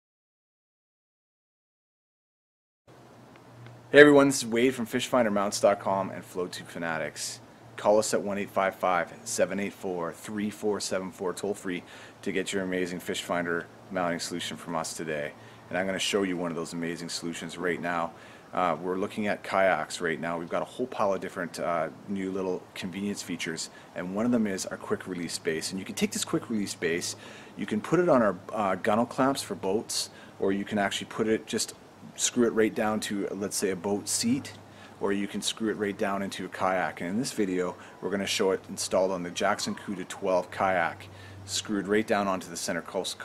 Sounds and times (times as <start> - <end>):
Speech: 3.9 - 43.2.